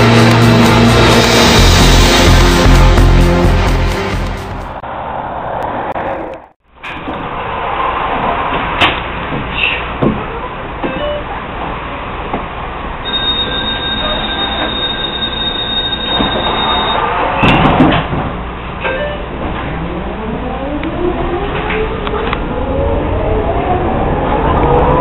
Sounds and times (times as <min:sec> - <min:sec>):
Outside, urban or manmade: 0:00.0 - 0:25.0.